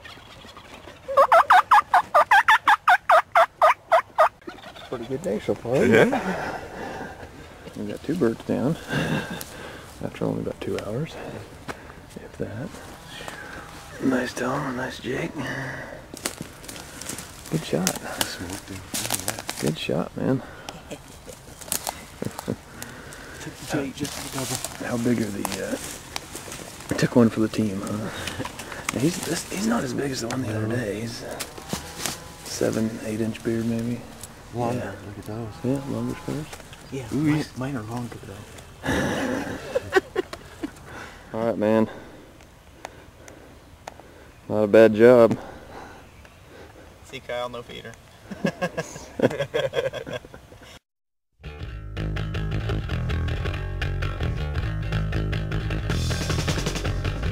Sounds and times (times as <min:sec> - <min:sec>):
Gobble: 0:00.0 - 0:05.2.